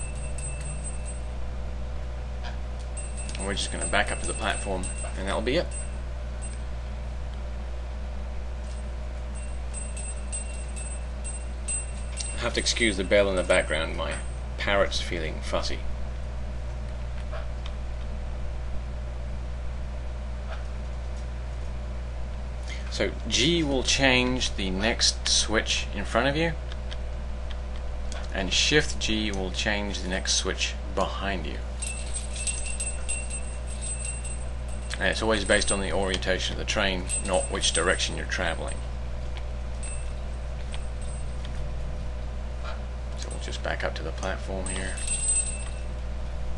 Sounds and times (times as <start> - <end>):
Speech: 3.4 - 5.7, 12.4 - 15.9, 22.8 - 26.6, 28.3 - 31.6, 35.0 - 38.8, 43.2 - 45.0.